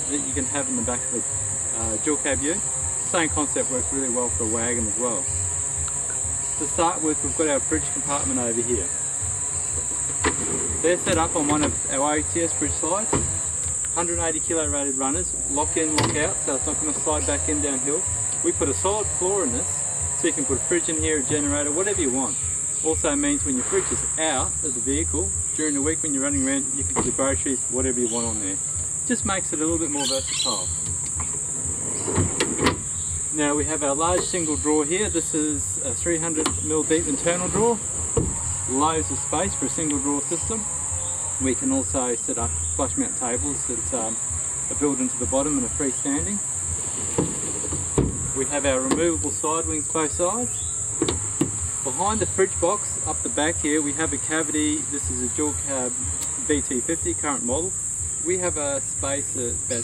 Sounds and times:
Speech: 0.0 - 5.3, 6.6 - 8.9, 10.8 - 13.2, 14.0 - 30.7, 33.3 - 37.8, 38.7 - 40.6, 41.4 - 46.4, 48.4 - 50.5, 51.9 - 59.8
Insect: 0.0 - 59.8.

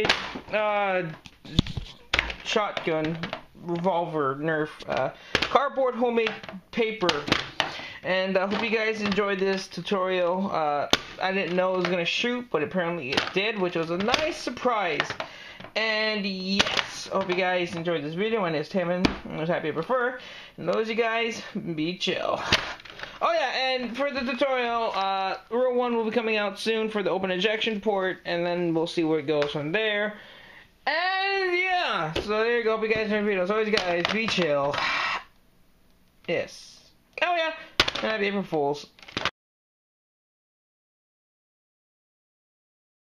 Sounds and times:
Speech: 0.0 - 1.7, 2.4 - 7.3, 8.0 - 15.2, 15.8 - 22.5, 23.2 - 30.2, 30.8 - 34.8, 36.3 - 38.9
Inside, small room: 0.0 - 39.4.

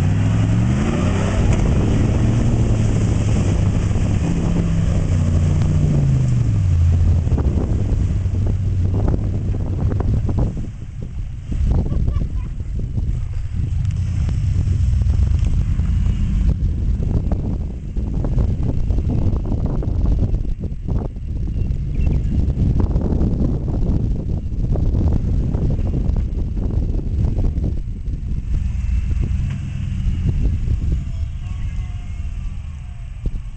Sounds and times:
Truck: 0.0 - 33.5.

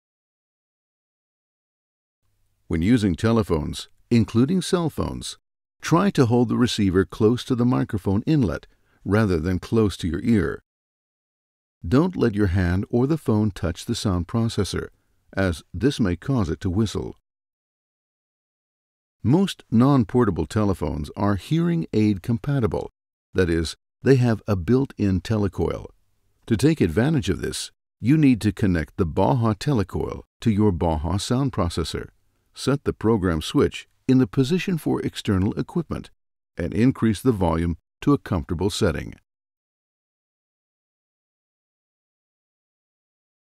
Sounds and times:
Speech: 2.7 - 10.6, 11.9 - 17.2, 19.3 - 39.3.

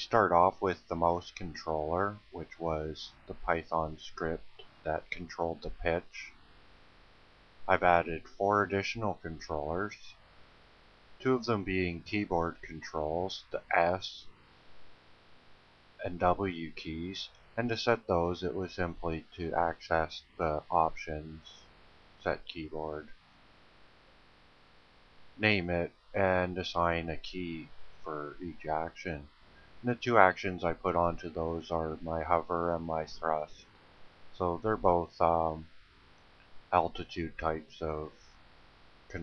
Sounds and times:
Speech: 0.0 - 6.3, 7.7 - 10.1, 11.2 - 14.3, 16.0 - 21.6, 22.2 - 23.1, 25.4 - 33.6, 34.4 - 35.7, 36.8 - 38.2.

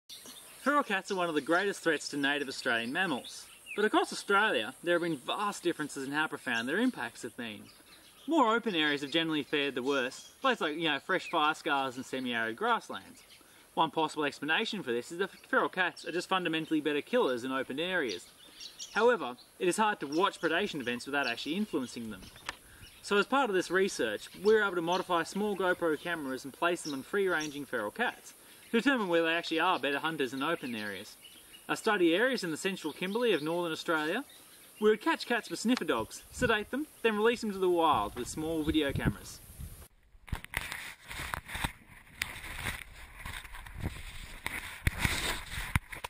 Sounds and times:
Speech: 0.6 - 7.7, 8.3 - 13.2, 13.8 - 18.2, 19.0 - 22.3, 23.0 - 39.4.

